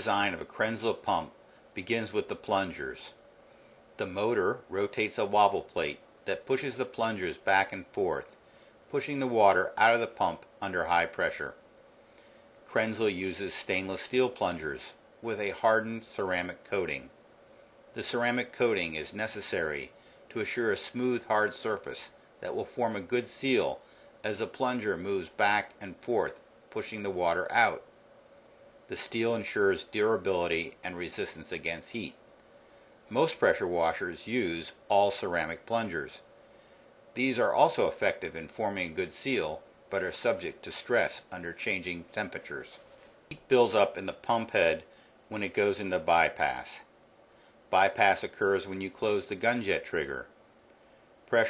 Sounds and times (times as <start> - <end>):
Speech: 0.0 - 3.2, 4.0 - 11.6, 12.7 - 17.2, 18.0 - 27.9, 28.9 - 32.2, 33.1 - 36.3, 37.2 - 46.9, 47.7 - 50.4.